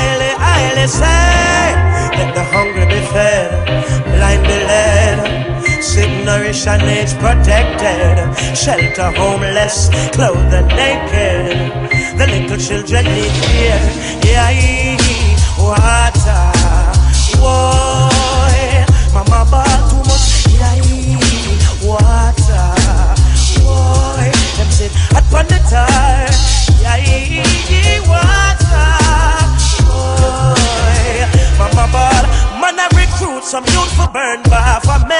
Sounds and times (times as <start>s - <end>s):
Music: 0.0s - 35.1s.